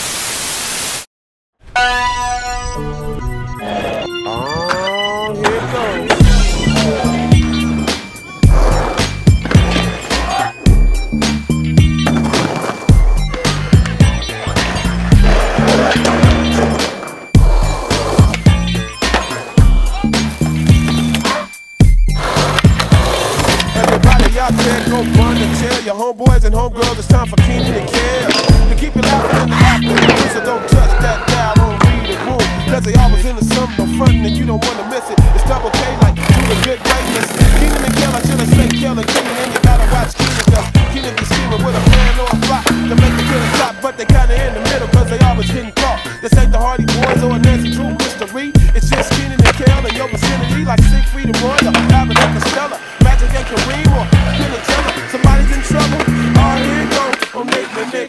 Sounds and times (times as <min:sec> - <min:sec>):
Skateboard: 0:12.0 - 0:19.6, 0:20.2 - 0:21.5, 0:22.2 - 0:25.8, 0:27.6 - 0:32.3, 0:34.6 - 0:45.0, 0:46.9 - 0:50.5, 0:51.3 - 0:58.0.